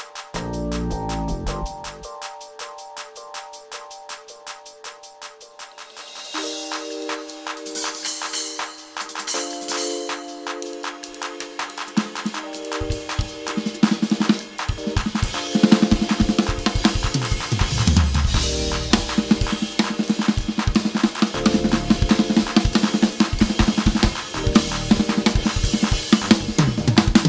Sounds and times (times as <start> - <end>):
Drum: 0.0 - 27.2
Drum kit: 0.0 - 27.2.